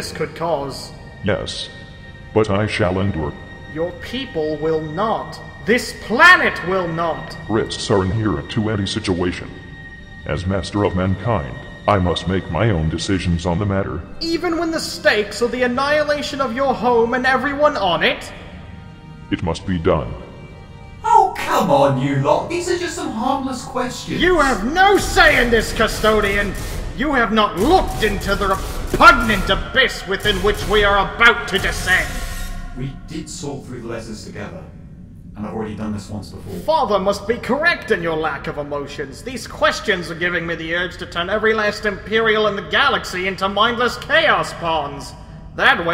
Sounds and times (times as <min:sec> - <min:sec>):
Music: 0:00.0 - 0:45.9
Speech synthesizer: 0:02.4 - 0:09.6, 0:10.3 - 0:18.3, 0:21.1 - 0:32.1, 0:32.8 - 0:34.7, 0:35.4 - 0:45.9.